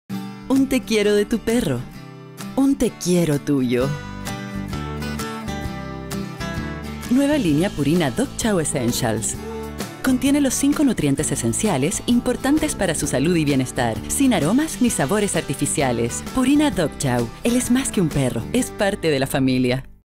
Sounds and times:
Music: 0:00.1 - 0:20.0
Speech: 0:00.5 - 0:01.9, 0:02.6 - 0:04.0, 0:07.1 - 0:09.4, 0:10.1 - 0:20.0.

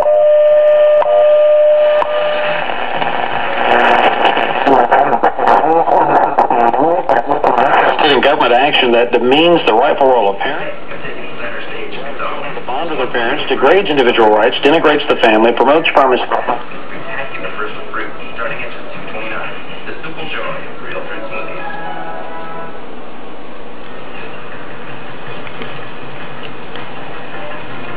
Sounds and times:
Radio: 0:02.0 - 0:21.6
Speech: 0:07.9 - 0:21.7.

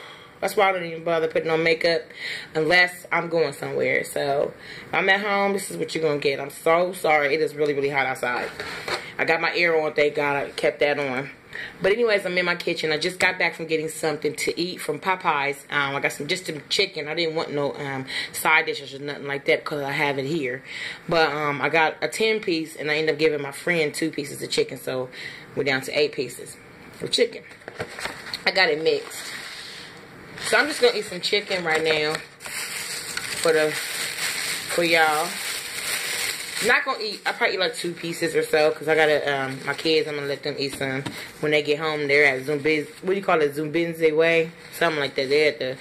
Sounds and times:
Speech: 0:00.4 - 0:08.5, 0:09.2 - 0:27.5, 0:28.4 - 0:29.2, 0:30.5 - 0:32.3, 0:33.4 - 0:33.8, 0:34.7 - 0:35.4, 0:36.6 - 0:45.8.

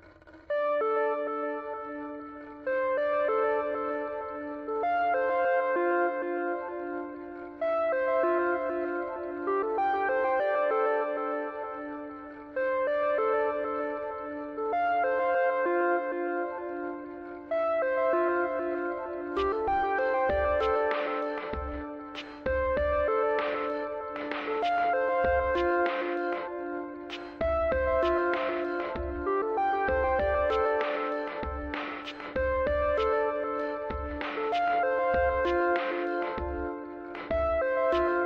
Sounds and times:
Music: 0:00.0 - 0:38.2.

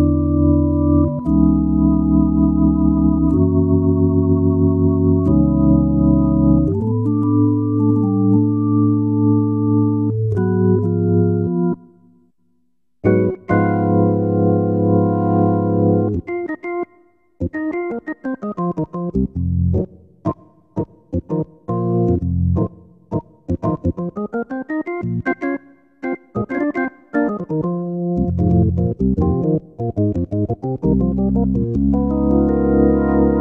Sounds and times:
Hammond organ: 0:00.0 - 0:12.2, 0:13.0 - 0:33.4.

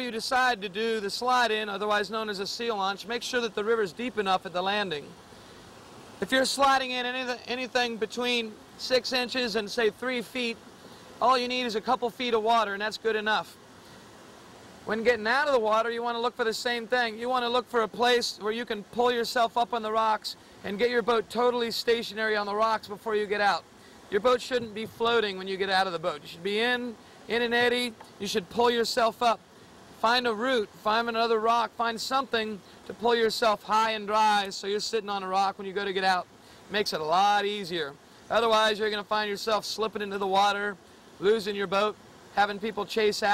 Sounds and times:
Speech: 0:00.0 - 0:05.2, 0:06.2 - 0:10.6, 0:11.2 - 0:13.6, 0:14.9 - 0:29.4, 0:30.0 - 0:43.3.

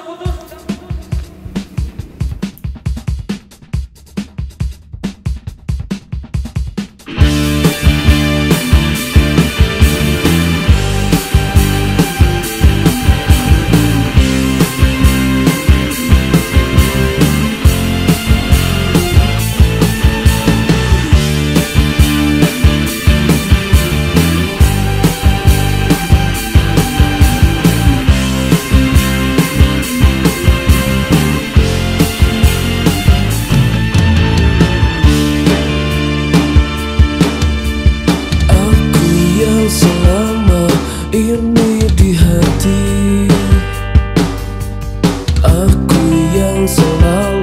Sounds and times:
Music: 0:00.0 - 0:47.4.

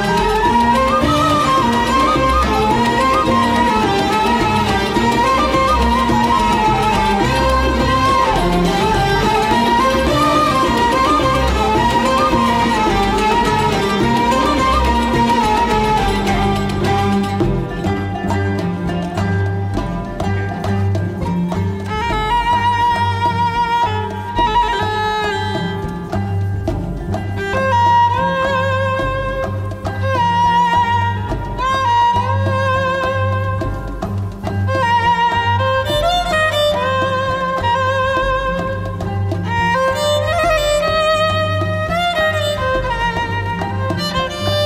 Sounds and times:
Orchestra: 0:00.0 - 0:44.6
Violin, fiddle: 0:00.0 - 0:44.6.

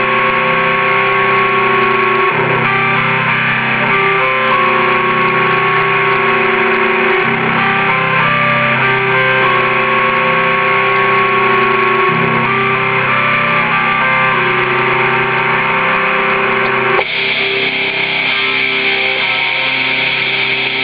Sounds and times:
Guitar: 0:00.0 - 0:20.8.

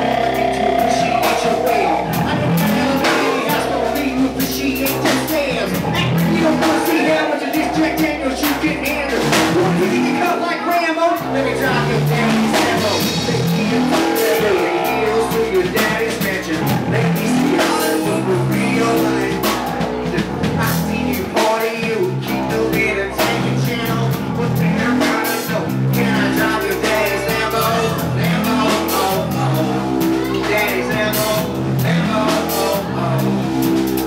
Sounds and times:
Dubstep: 0:00.0 - 0:10.1.

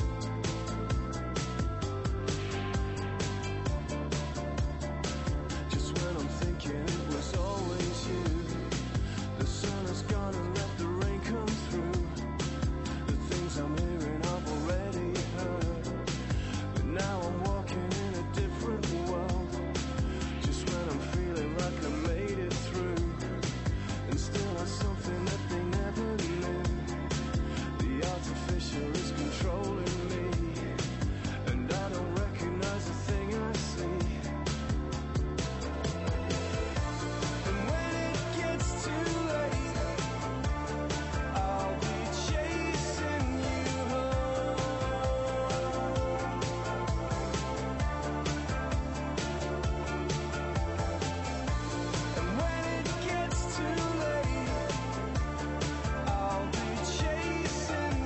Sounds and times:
Music: 0:00.0 - 0:58.0.

